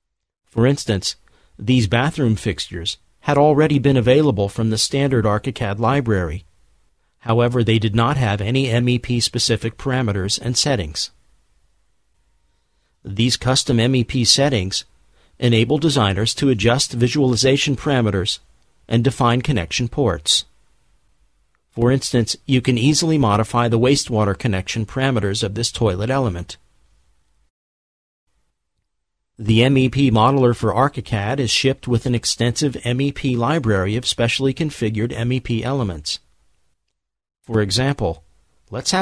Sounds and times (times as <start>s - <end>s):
Speech: 0.5s - 6.5s, 7.2s - 11.2s, 13.0s - 20.5s, 21.8s - 26.6s, 29.4s - 36.2s, 37.5s - 39.0s.